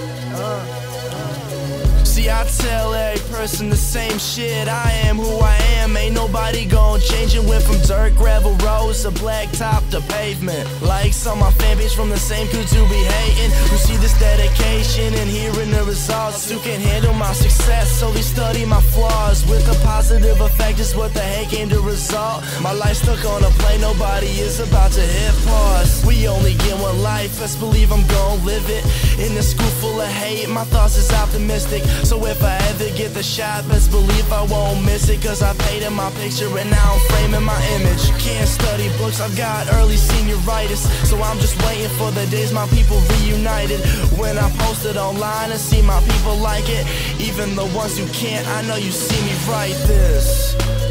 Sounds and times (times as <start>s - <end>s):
Music: 0.0s - 50.9s.